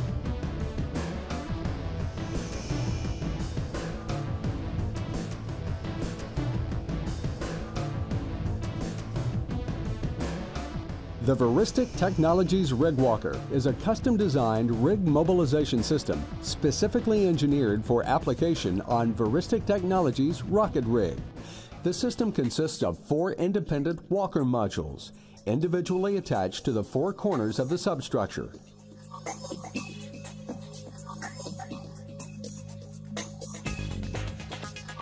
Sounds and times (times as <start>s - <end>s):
Music: 0.0s - 35.0s
Speech: 11.2s - 21.2s, 21.8s - 28.6s.